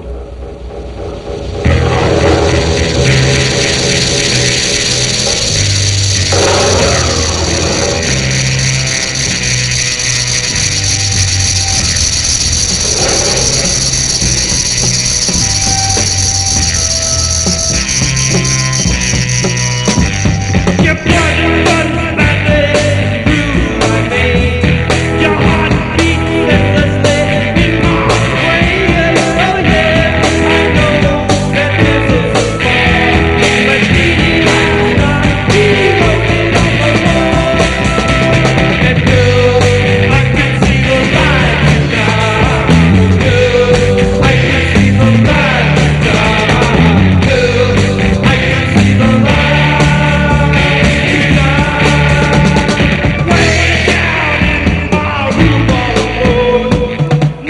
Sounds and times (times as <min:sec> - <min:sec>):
Music: 0:00.0 - 0:57.4.